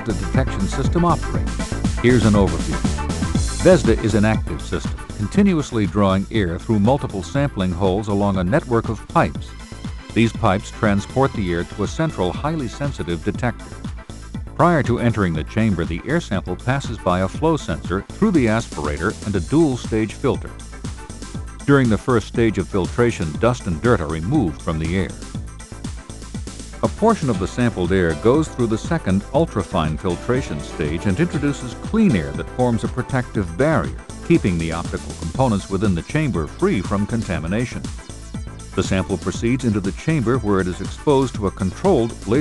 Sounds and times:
Speech: 0:00.0 - 0:01.4, 0:02.0 - 0:02.8, 0:03.6 - 0:09.5, 0:10.2 - 0:13.6, 0:14.6 - 0:20.5, 0:21.7 - 0:25.2, 0:26.8 - 0:37.9, 0:38.8 - 0:42.4
Music: 0:00.0 - 0:42.4.

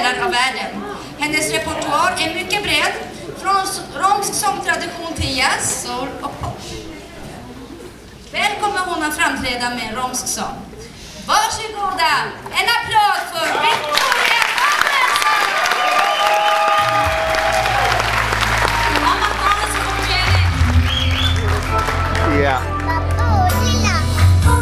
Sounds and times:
Music: 0:16.8 - 0:24.6.

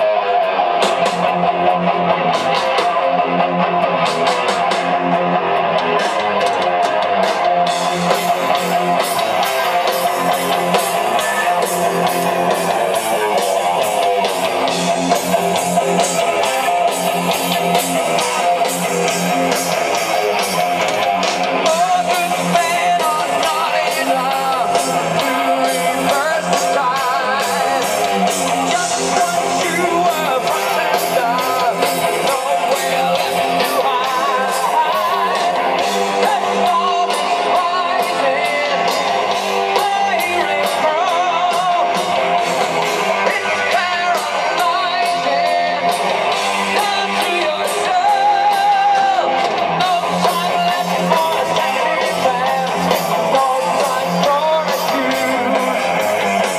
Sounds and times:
Music: 0:00.0 - 0:56.5.

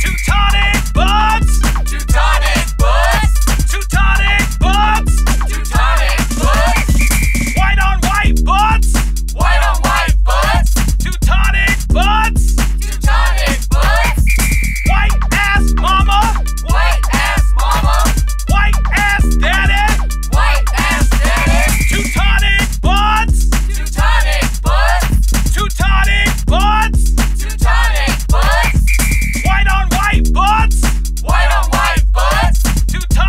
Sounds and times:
Music: 0:00.0 - 0:33.2.

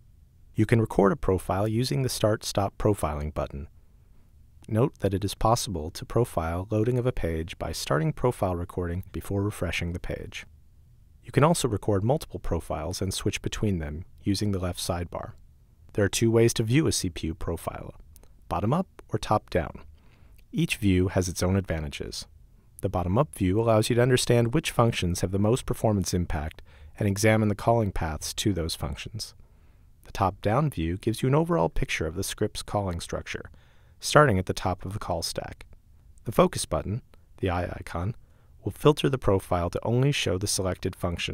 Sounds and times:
Speech: 0:00.6 - 0:03.7, 0:04.6 - 0:10.5, 0:11.2 - 0:19.9, 0:20.5 - 0:29.4, 0:30.0 - 0:41.3.

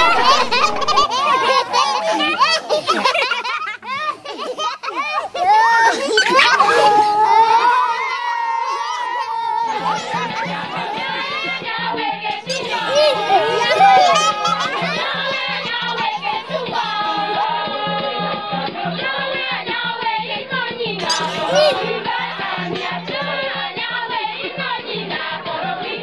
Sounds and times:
Speech: 0:00.0 - 0:11.6, 0:12.3 - 0:17.9, 0:21.0 - 0:23.3
Music: 0:00.0 - 0:26.0.

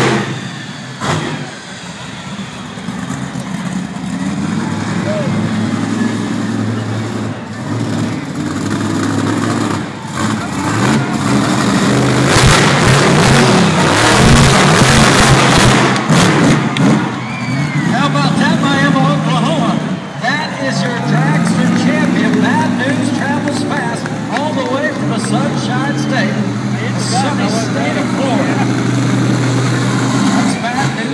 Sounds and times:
Truck: 0:00.0 - 0:31.1
Speech: 0:17.9 - 0:28.8, 0:30.2 - 0:31.1.

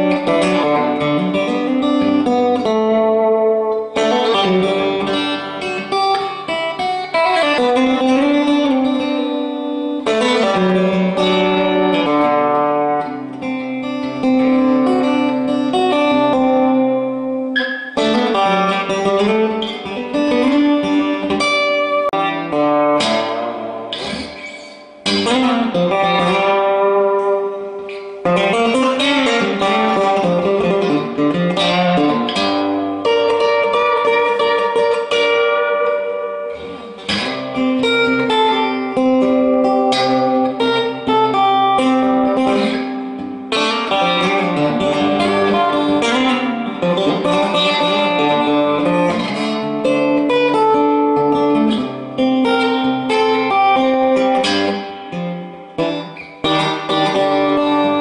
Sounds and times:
Electric guitar: 0:00.0 - 0:58.0
Strum: 0:00.0 - 0:58.0.

